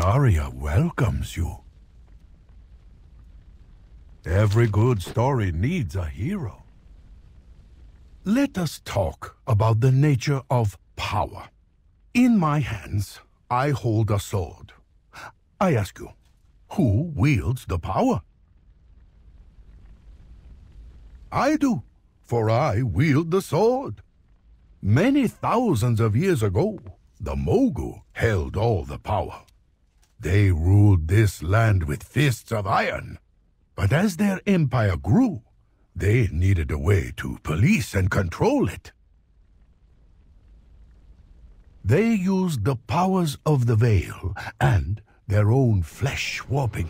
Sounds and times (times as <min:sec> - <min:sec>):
Speech synthesizer: 0:00.0 - 0:01.6, 0:04.3 - 0:06.6, 0:08.3 - 0:11.5, 0:12.2 - 0:16.1, 0:16.7 - 0:18.2, 0:21.3 - 0:24.0, 0:24.8 - 0:29.4, 0:30.2 - 0:33.2, 0:33.8 - 0:35.4, 0:36.0 - 0:38.9, 0:41.9 - 0:46.8.